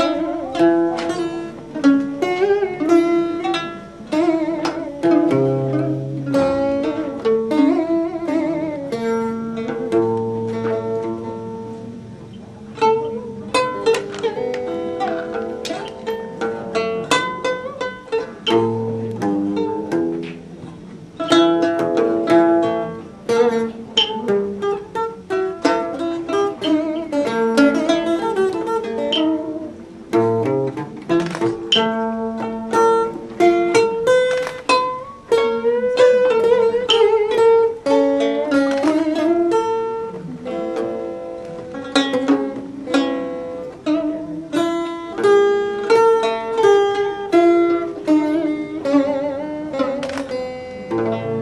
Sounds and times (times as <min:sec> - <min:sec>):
Music: 0:00.0 - 0:51.4.